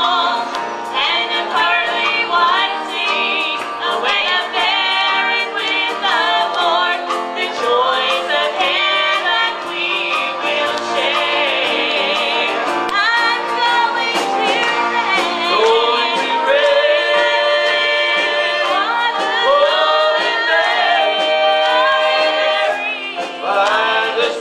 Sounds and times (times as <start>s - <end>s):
Music: 0.0s - 24.4s.